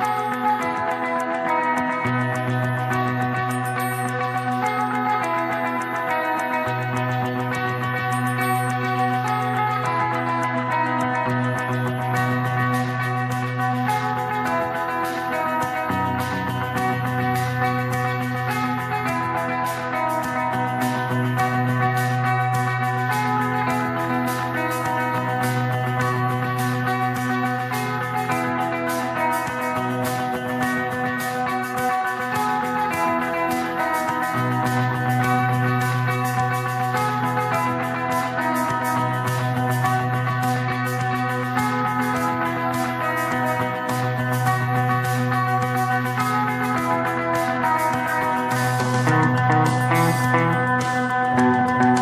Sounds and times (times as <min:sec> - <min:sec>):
Electric guitar: 0:00.0 - 0:52.0.